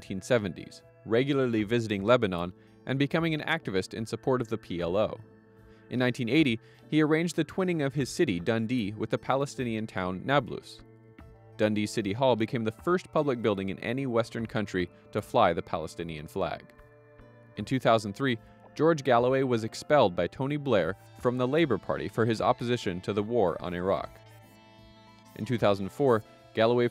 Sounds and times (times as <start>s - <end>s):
Male speech, man speaking: 0.0s - 5.2s, 5.9s - 10.8s, 11.6s - 16.7s, 17.6s - 24.1s, 25.4s - 26.9s
Narration, monologue: 0.0s - 26.9s.